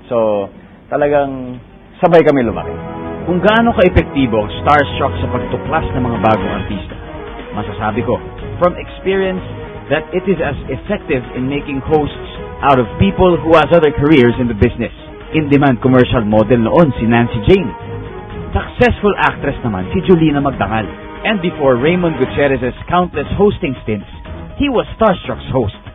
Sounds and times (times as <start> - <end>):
Music: 0.0 - 25.9
Speech: 0.1 - 2.7, 3.3 - 6.9, 7.6 - 17.7, 18.6 - 25.8.